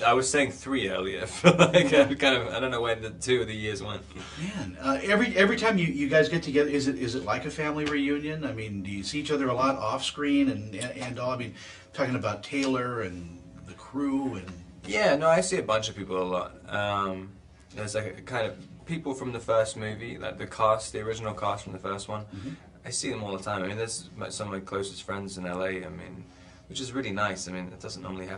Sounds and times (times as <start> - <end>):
Speech: 0.0 - 28.3.